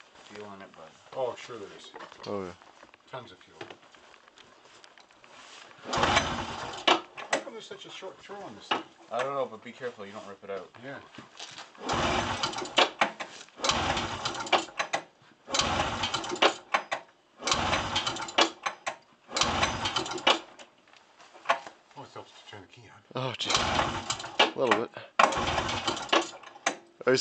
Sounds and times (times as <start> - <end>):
Speech: 0.3 - 3.7, 7.4 - 11.1, 22.0 - 23.6, 24.6 - 25.1.